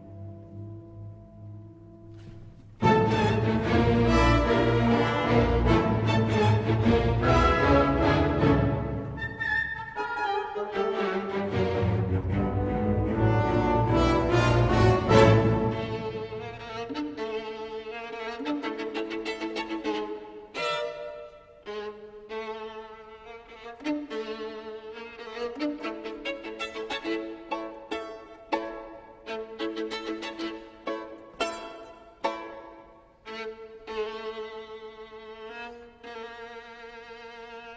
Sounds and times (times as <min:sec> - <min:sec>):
Violin, fiddle: 0:02.8 - 0:37.7.